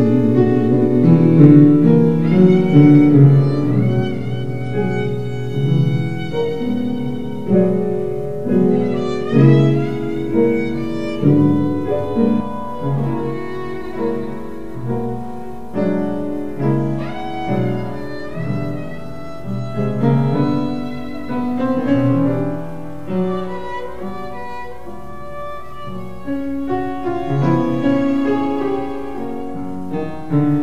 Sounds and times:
Violin, fiddle: 0:00.0 - 0:30.6.

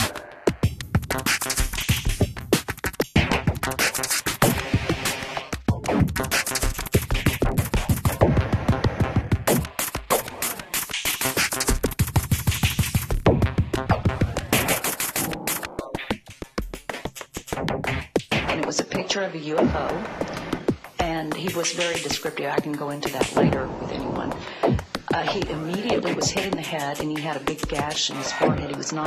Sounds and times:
Speech: 0:18.5 - 0:20.0, 0:21.0 - 0:24.4, 0:25.1 - 0:29.0.

